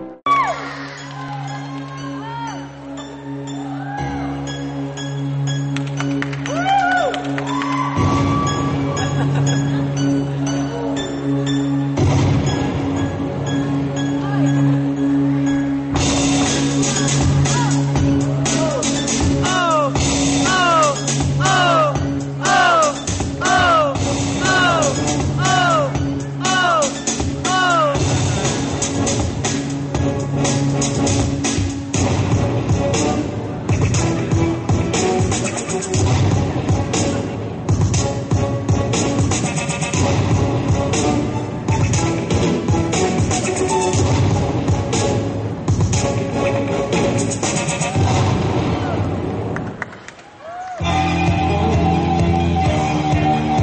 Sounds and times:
Music: 0:00.0 - 0:53.6.

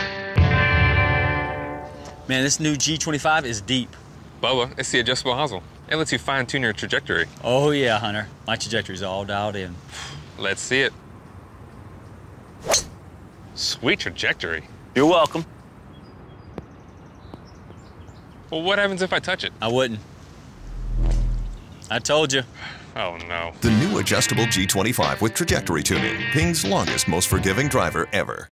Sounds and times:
Music: 0:00.0 - 0:02.3, 0:23.6 - 0:28.5
Speech: 0:02.3 - 0:09.8, 0:13.6 - 0:15.5, 0:18.5 - 0:20.0, 0:21.9 - 0:28.5.

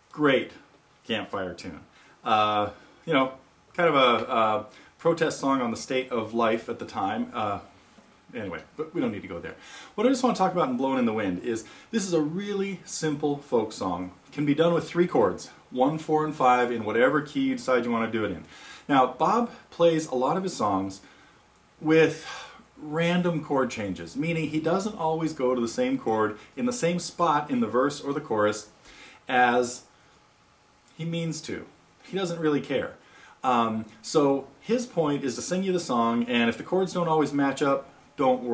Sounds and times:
Speech: 0:00.1 - 0:21.1, 0:21.8 - 0:29.9, 0:30.9 - 0:38.5.

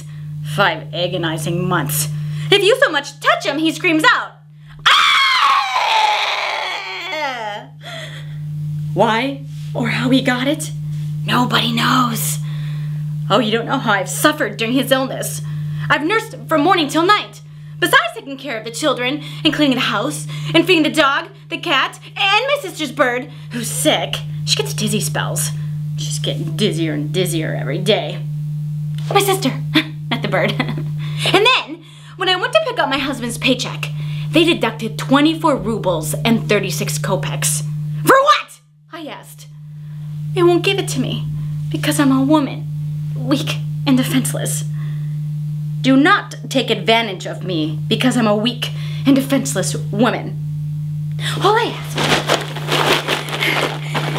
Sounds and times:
Narration, monologue: 0:00.1 - 0:04.7, 0:07.9 - 0:29.7, 0:31.0 - 0:50.4.

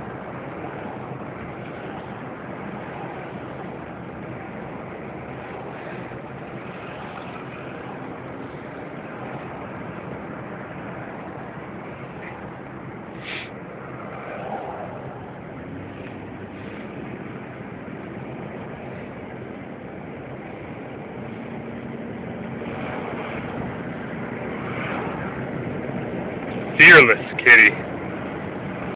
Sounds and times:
Speech: 0:26.8 - 0:27.8.

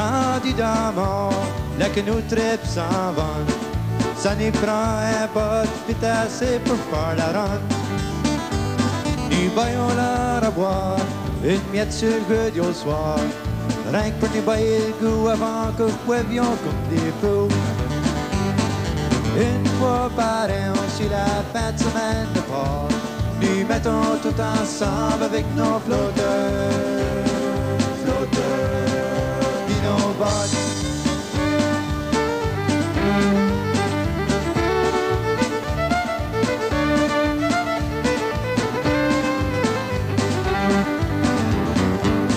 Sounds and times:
Music: 0:00.0 - 0:42.3.

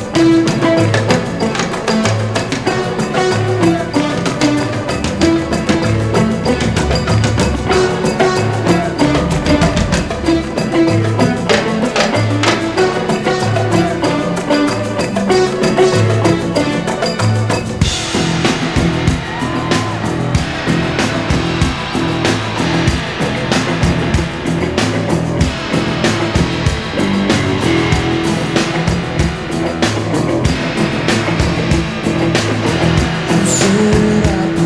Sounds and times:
Rock music: 0:00.0 - 0:34.6.

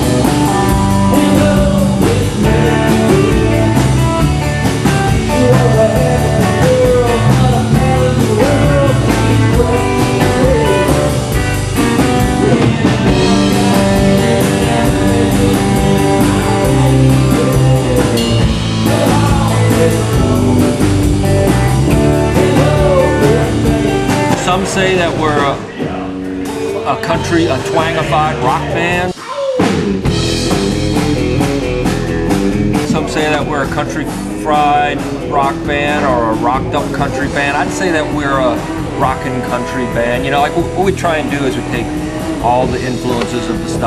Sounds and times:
Music: 0:00.0 - 0:43.8
Speech: 0:24.4 - 0:26.1, 0:26.7 - 0:29.6, 0:32.8 - 0:43.8.

